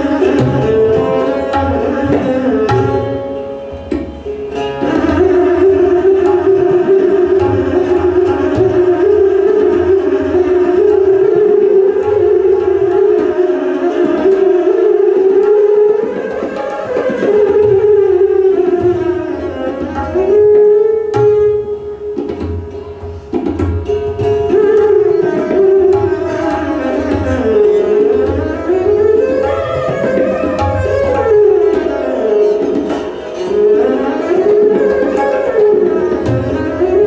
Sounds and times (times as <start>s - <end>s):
Classical music: 0.0s - 23.0s, 24.5s - 37.0s
Tabla: 0.0s - 37.0s.